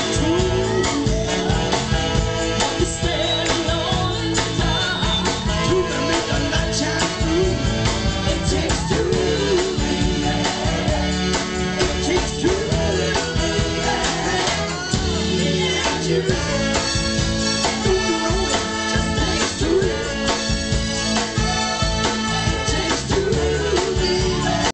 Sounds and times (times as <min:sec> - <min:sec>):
Music: 0:00.0 - 0:24.7.